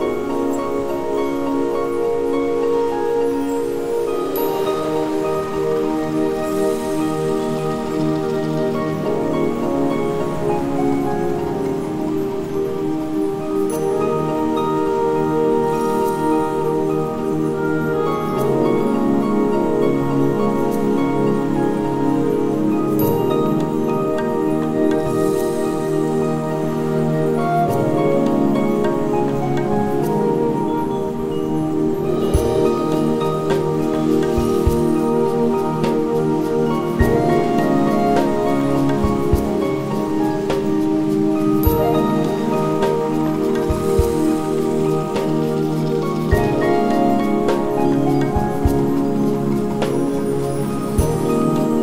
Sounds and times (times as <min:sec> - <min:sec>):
Music: 0:00.0 - 0:51.8.